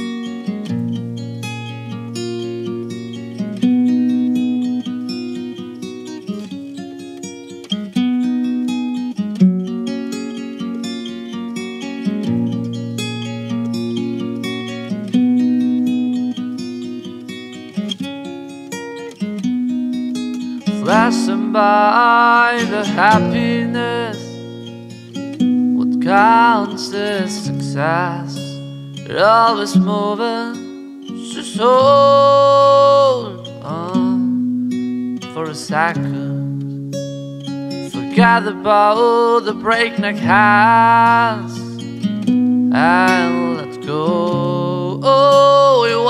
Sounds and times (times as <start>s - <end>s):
Acoustic guitar: 0.0s - 46.0s.